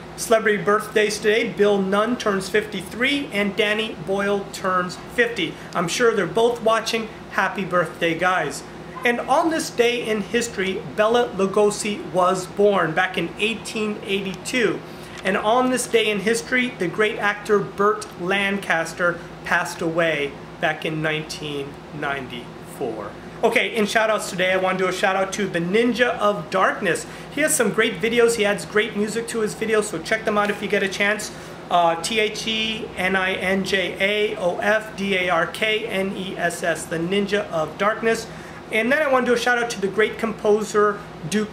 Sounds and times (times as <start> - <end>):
Speech: 0.2 - 41.5.